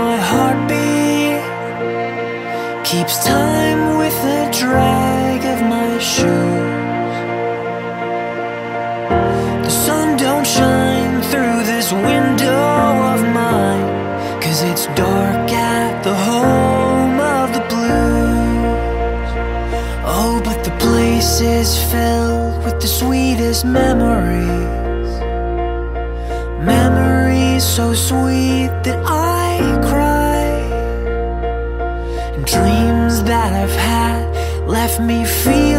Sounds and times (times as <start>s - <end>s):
Music: 0.0s - 35.7s.